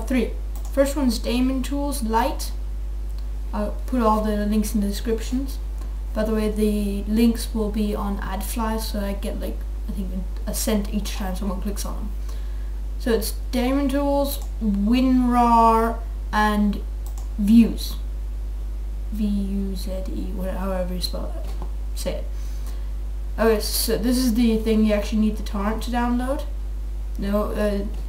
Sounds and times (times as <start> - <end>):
Speech: 0.0 - 2.6, 3.5 - 12.1, 13.0 - 18.1, 19.1 - 22.3, 23.4 - 26.6, 27.2 - 28.0.